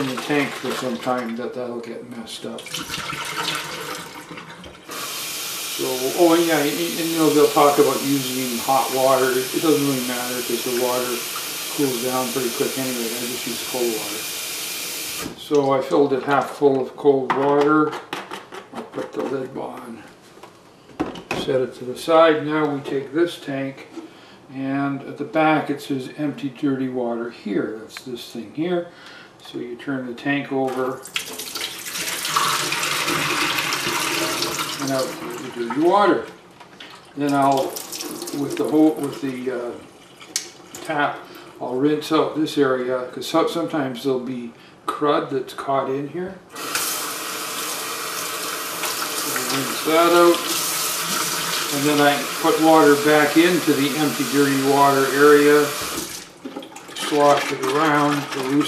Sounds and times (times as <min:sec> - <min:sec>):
Speech: 0:00.0 - 0:02.7, 0:05.8 - 0:14.2, 0:15.4 - 0:18.0, 0:18.9 - 0:20.1, 0:21.3 - 0:23.9, 0:24.5 - 0:31.0, 0:34.8 - 0:36.4, 0:37.2 - 0:39.8, 0:40.8 - 0:46.4, 0:49.2 - 0:50.5, 0:51.7 - 0:55.8, 0:57.0 - 0:58.6.